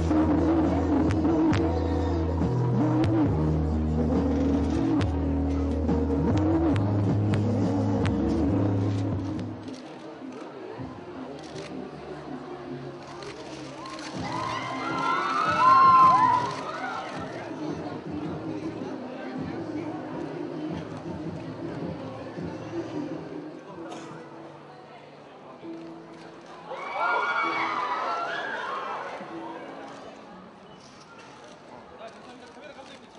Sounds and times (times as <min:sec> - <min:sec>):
Music: 0:00.0 - 0:31.5.